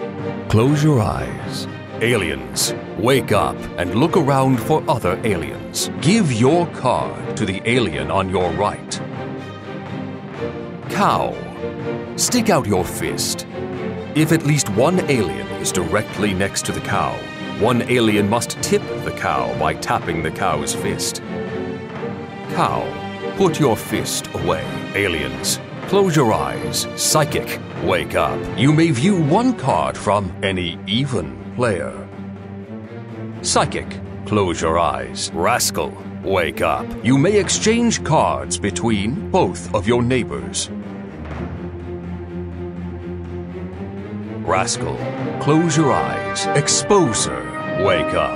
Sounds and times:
Music: 0.0 - 48.3
Speech: 0.5 - 9.0, 10.9 - 11.5, 12.2 - 13.4, 14.2 - 21.2, 22.5 - 32.1, 33.4 - 40.7, 44.4 - 48.3.

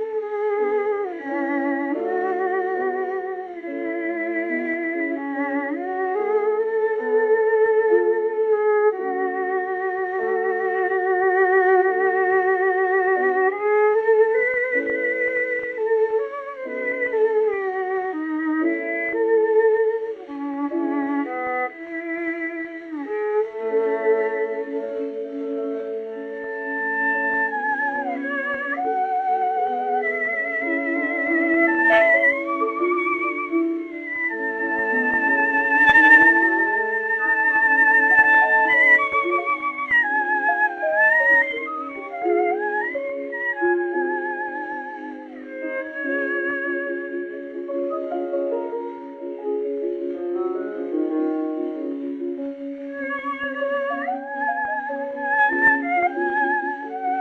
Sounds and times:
Classical music: 0.0 - 57.2
Violin, fiddle: 0.0 - 57.2.

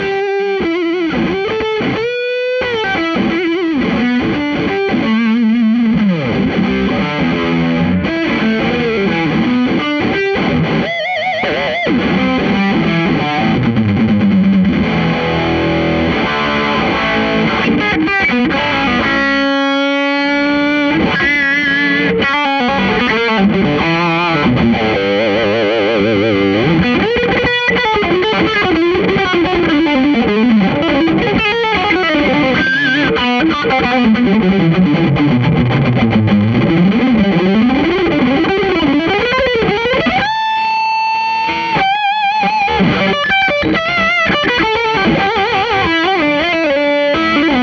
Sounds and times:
Strum: 11.9 - 40.3.

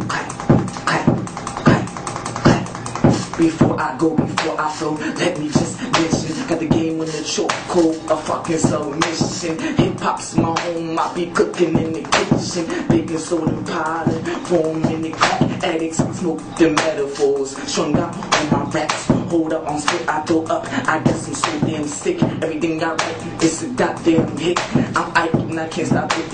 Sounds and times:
Music: 0.0 - 26.3.

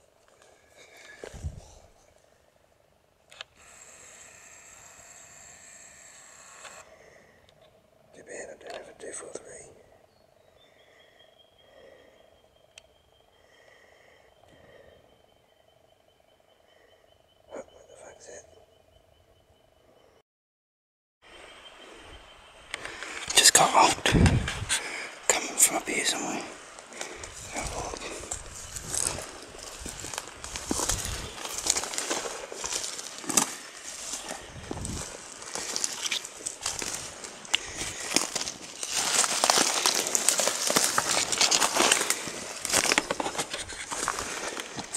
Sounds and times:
Speech: 8.2 - 9.8, 17.5 - 18.4, 23.3 - 24.2, 25.3 - 26.6.

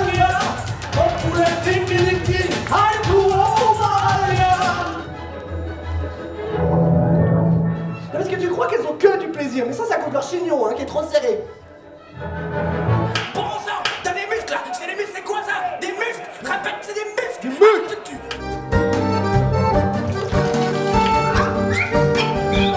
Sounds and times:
Speech: 0.0 - 5.0, 8.1 - 11.5, 13.3 - 18.2
Music: 0.0 - 14.4, 17.8 - 22.7.

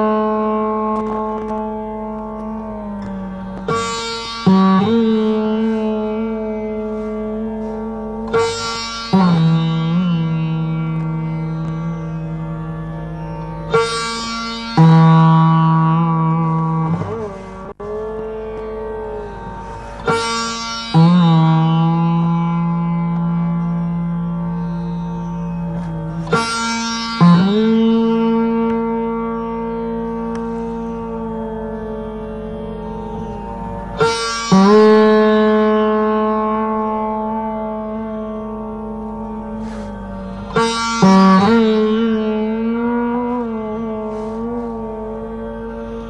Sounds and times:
Sitar: 0.0 - 46.1.

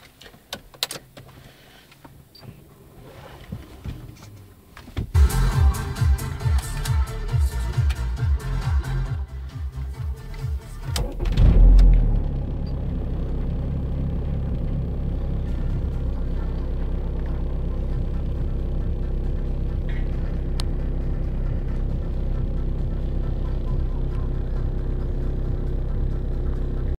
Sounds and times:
Vehicle: 0.0 - 26.9
Music: 5.2 - 11.9, 15.4 - 26.9.

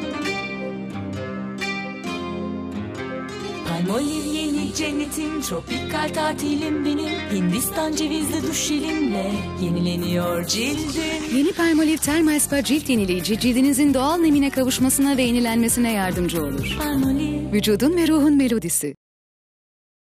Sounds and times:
Jingle (music): 0.0 - 18.0
Speech: 11.4 - 16.8, 17.5 - 19.0.

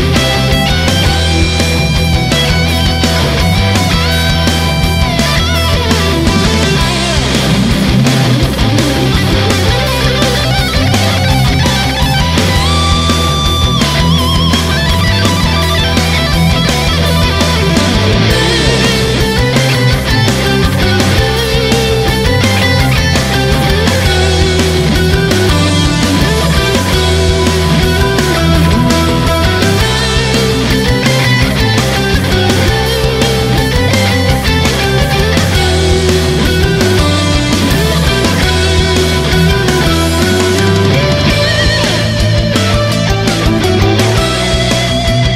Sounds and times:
Music: 0.0 - 45.3.

